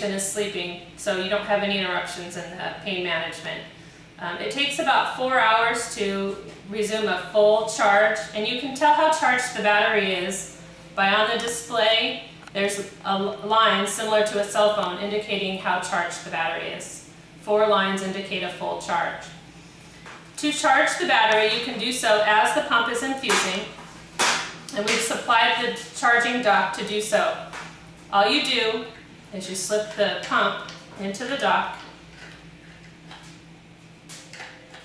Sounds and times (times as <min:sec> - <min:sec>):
Speech: 0:00.0 - 0:19.4, 0:20.4 - 0:23.8, 0:24.7 - 0:27.5, 0:28.2 - 0:31.9.